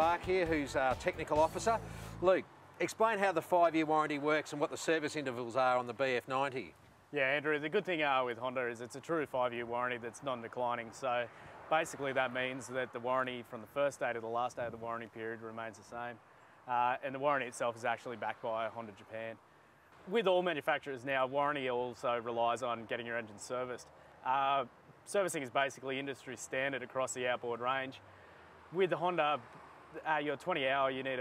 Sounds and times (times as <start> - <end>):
Speech: 0.0 - 19.4, 20.1 - 28.0, 28.7 - 29.4, 30.0 - 31.2.